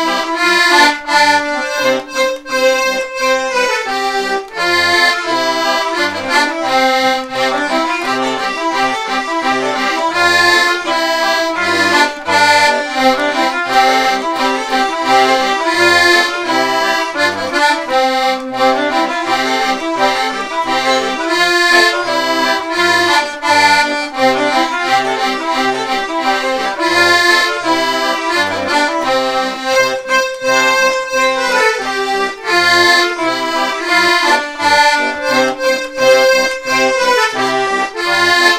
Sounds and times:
Traditional music: 0.0s - 38.5s.

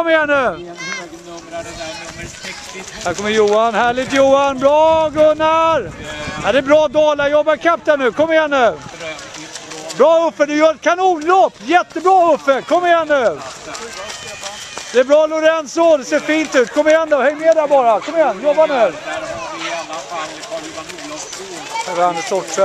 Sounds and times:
Run: 0.0s - 22.6s.

